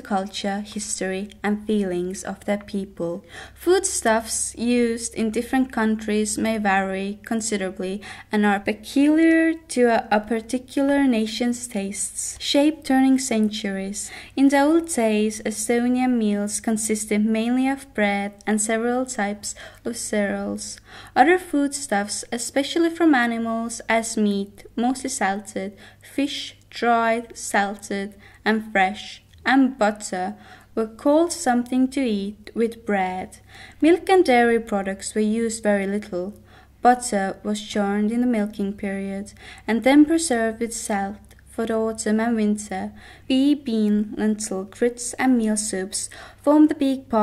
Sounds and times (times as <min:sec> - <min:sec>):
Speech: 0:00.0 - 0:47.2.